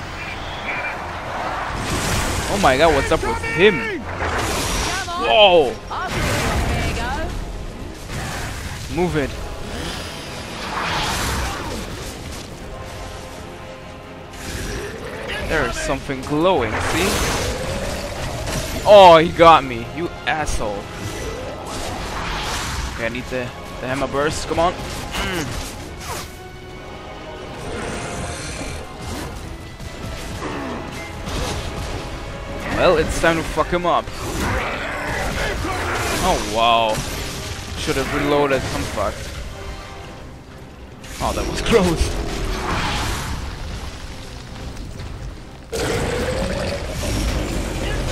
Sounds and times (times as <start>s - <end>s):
Music: 0.0s - 48.1s.